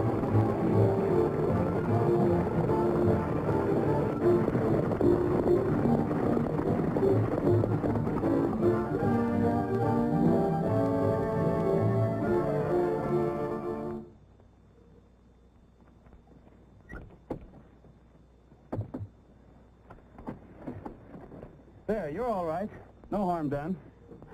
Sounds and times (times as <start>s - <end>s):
Music: 0.0s - 14.2s.